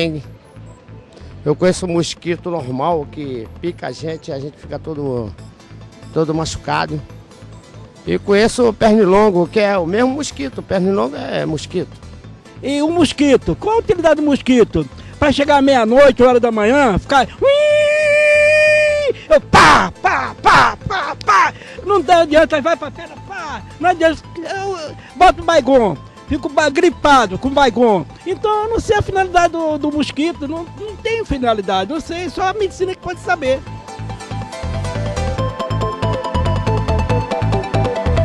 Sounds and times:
Music: 0.0s - 38.2s
Speech: 19.8s - 33.6s.

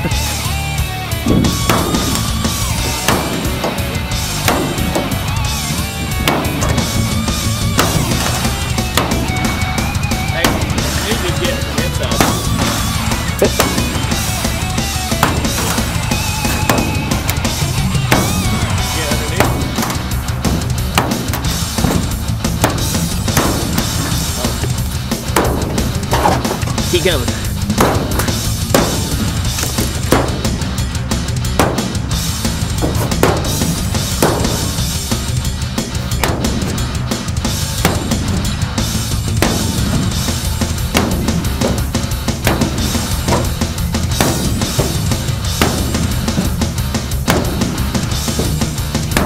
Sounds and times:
Music: 0.0s - 49.2s.

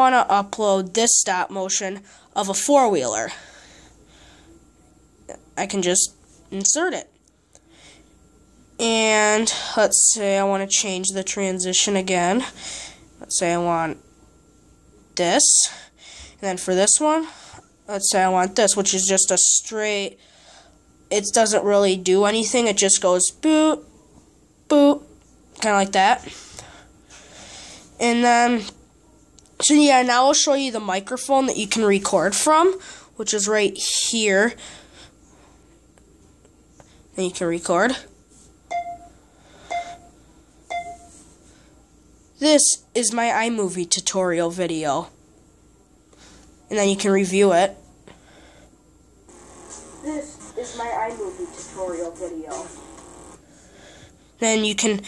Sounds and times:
Inside, small room: 0.0s - 55.0s
Beep, bleep: 38.7s - 39.1s, 39.7s - 40.1s, 40.7s - 41.1s.

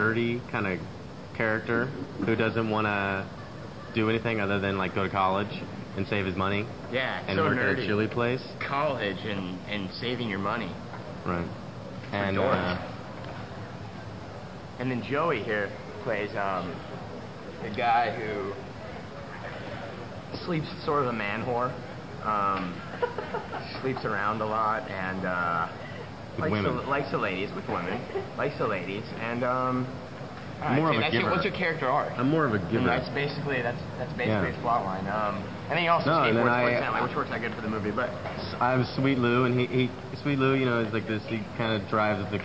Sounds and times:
Speech: 0.0s - 12.9s, 26.4s - 30.0s, 30.6s - 42.4s.

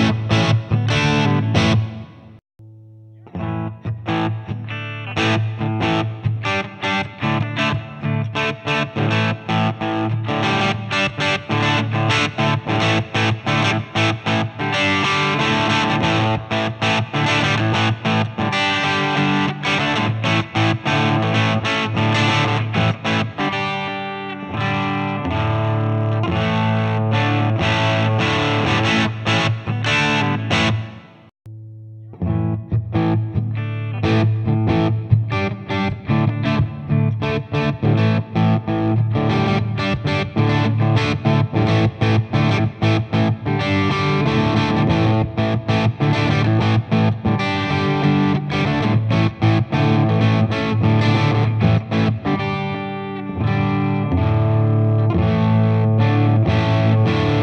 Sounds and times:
Electric guitar: 0.0s - 57.4s.

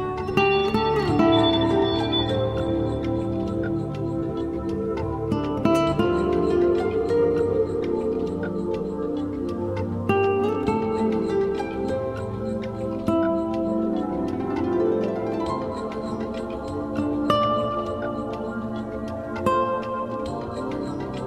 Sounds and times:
Music: 0.0s - 21.2s.

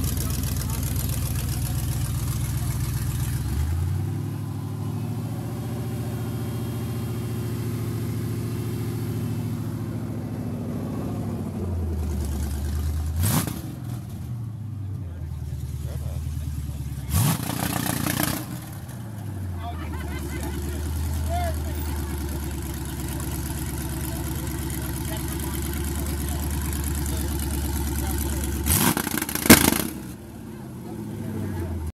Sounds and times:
Speech: 0.0s - 3.0s, 14.8s - 17.2s, 19.6s - 23.3s, 23.9s - 28.5s
Vehicle: 0.0s - 31.9s.

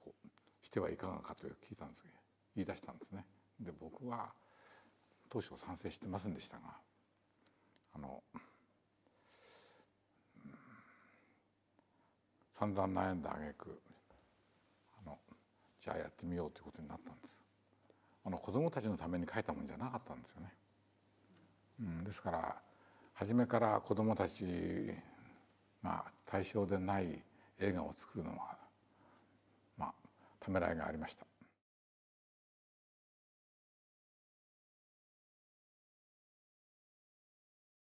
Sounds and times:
Speech: 0.0s - 4.4s, 5.3s - 6.9s, 7.9s - 8.5s, 12.5s - 14.0s, 14.9s - 17.4s, 18.2s - 20.6s, 21.8s - 22.6s, 23.2s - 28.7s, 29.8s - 31.6s.

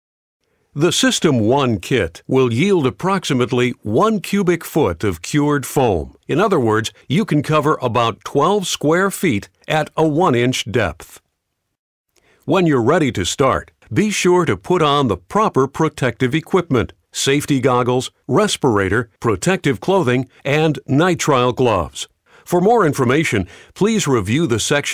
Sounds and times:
Speech: 0.8s - 11.2s, 12.5s - 24.9s.

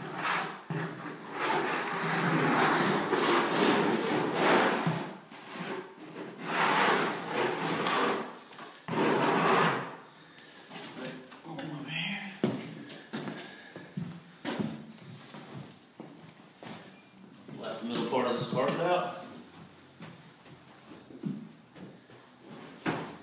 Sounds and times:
Speech: 11.0s - 12.5s, 17.5s - 19.2s.

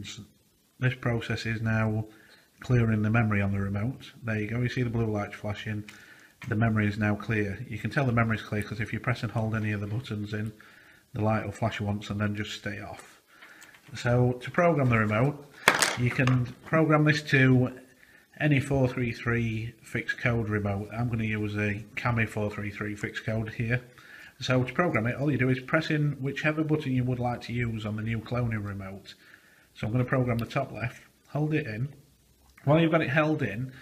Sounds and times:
Speech: 0.0s - 13.2s, 13.9s - 29.2s, 29.8s - 32.0s, 32.6s - 33.8s.

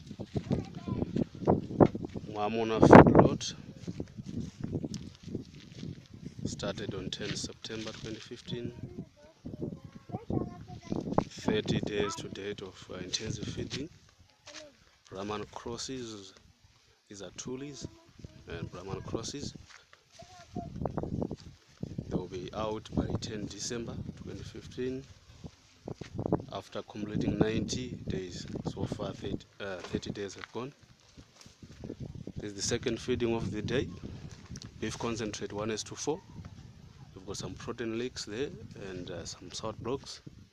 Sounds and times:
Speech: 6.5s - 13.9s, 17.1s - 19.6s, 26.5s - 30.8s, 34.8s - 36.2s, 37.2s - 40.2s.

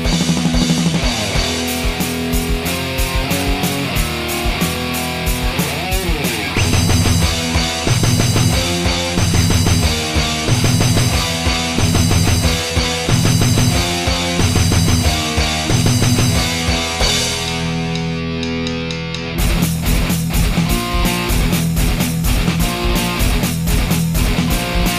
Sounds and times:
Strum: 0.0s - 24.9s.

